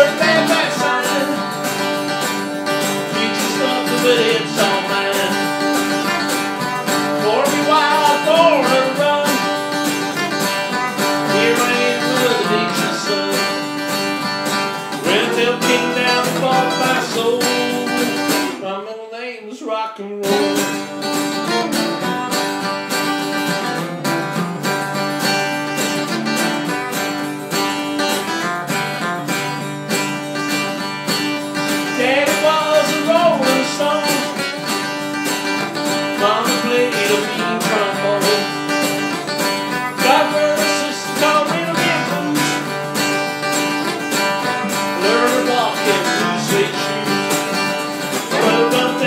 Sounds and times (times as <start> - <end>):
Rock and roll: 0.0 - 18.7, 20.2 - 49.0.